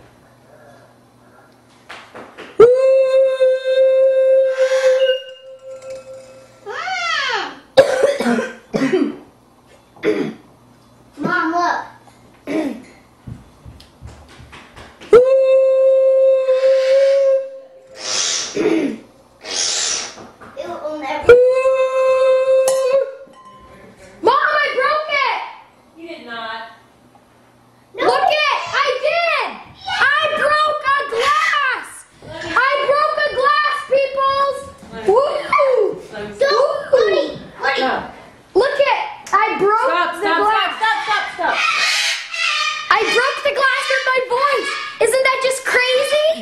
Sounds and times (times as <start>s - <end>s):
Child speech, kid speaking: 6.7s - 7.7s, 11.2s - 12.0s, 20.6s - 21.3s, 24.2s - 26.4s, 28.0s - 41.6s, 42.9s - 46.4s.